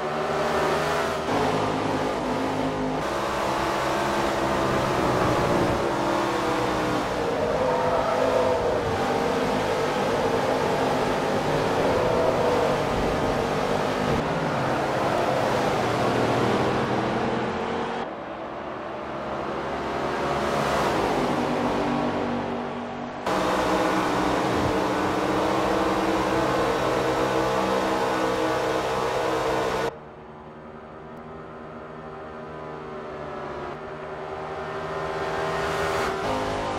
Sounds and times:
Car: 0.0s - 36.7s.

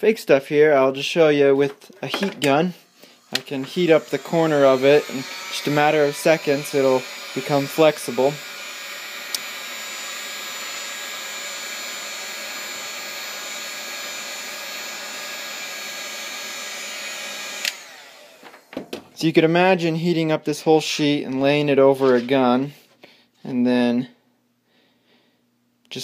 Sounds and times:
Hair dryer: 2.2s - 18.9s.

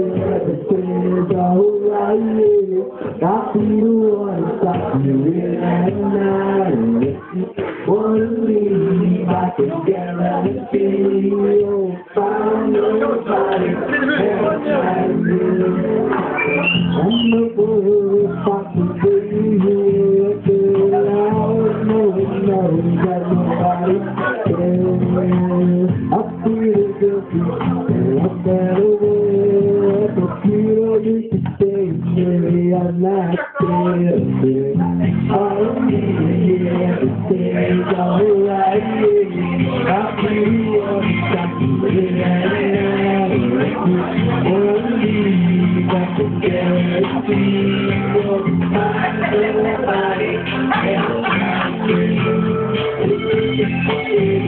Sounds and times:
Male singing: 0.0s - 54.4s
Music: 0.0s - 54.4s
Speech: 2.5s - 17.3s, 20.6s - 28.5s, 33.0s - 39.9s.

